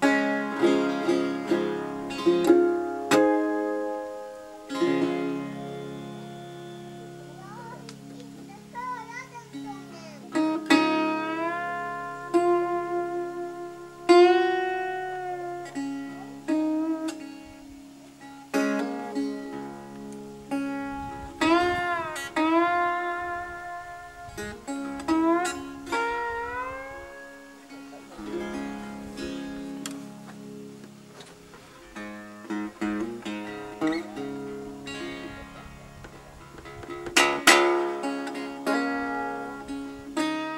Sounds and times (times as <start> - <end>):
Guitar: 0.0 - 40.5
Speech: 7.3 - 10.4.